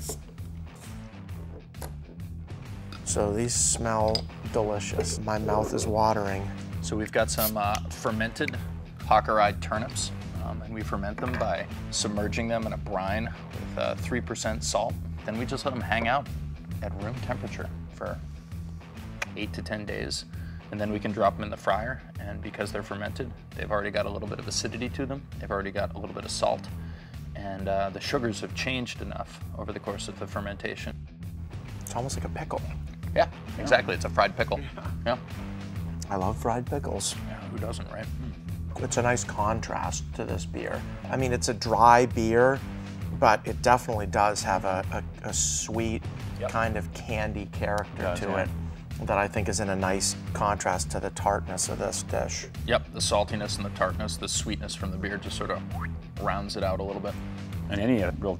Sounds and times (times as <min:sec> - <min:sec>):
Music: 0:00.0 - 0:58.3
Speech: 0:03.1 - 0:16.2, 0:27.4 - 0:30.9, 0:31.9 - 0:35.2, 0:36.0 - 0:38.2, 0:43.2 - 0:58.3.